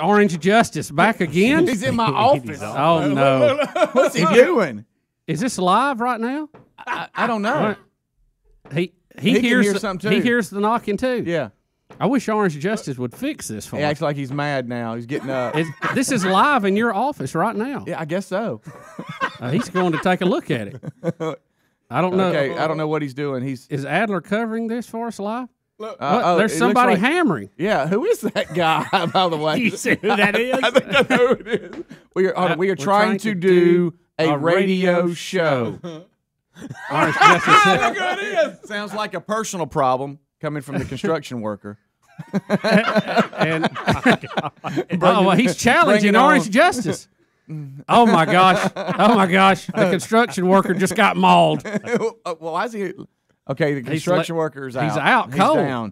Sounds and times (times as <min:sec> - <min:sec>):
Speech: 0:00.0 - 0:07.9, 0:08.7 - 0:18.6, 0:19.4 - 0:20.8, 0:21.9 - 0:36.0, 0:44.8 - 0:47.1, 0:47.8 - 0:55.9.